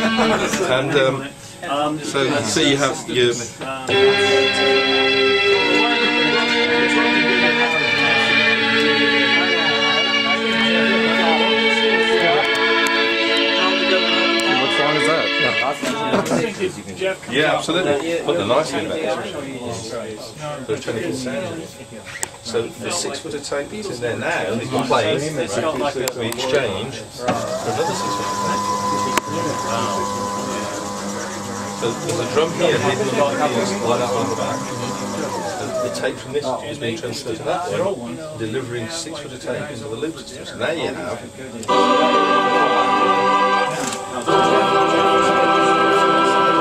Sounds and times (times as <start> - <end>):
Keyboard (musical): 0.0 - 1.4, 3.9 - 16.2, 27.6 - 36.2, 41.6 - 46.6
Speech: 0.0 - 42.8.